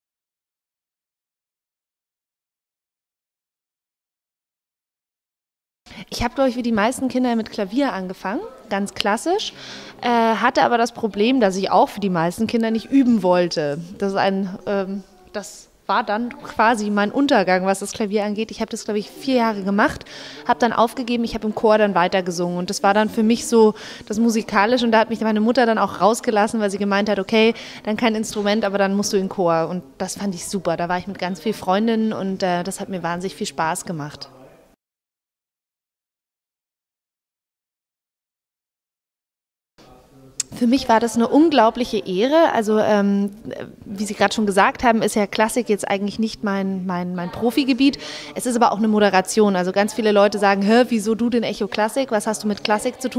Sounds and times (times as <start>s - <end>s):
Speech: 5.9s - 34.8s, 39.8s - 53.1s.